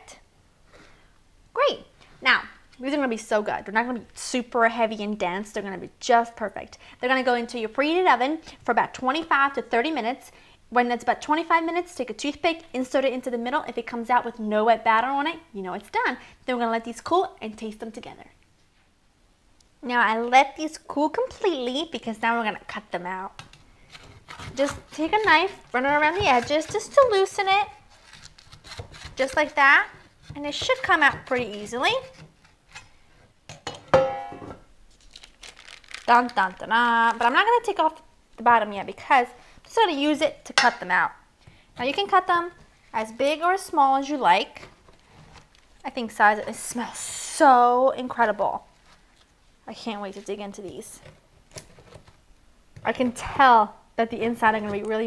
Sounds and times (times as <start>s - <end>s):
Inside, small room: 0.0s - 55.0s
Speech: 1.6s - 18.4s, 19.8s - 23.4s, 24.6s - 27.8s, 29.2s - 32.1s, 36.1s - 41.2s, 41.8s - 44.7s, 45.8s - 48.7s, 49.7s - 51.1s, 52.8s - 55.0s.